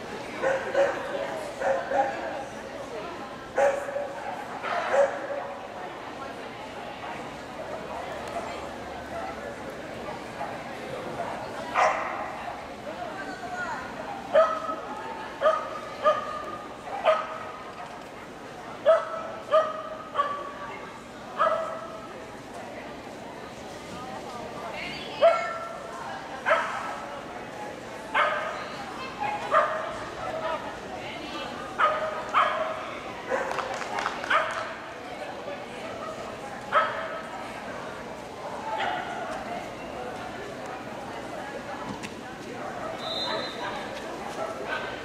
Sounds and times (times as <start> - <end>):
Speech: 0.0 - 45.0.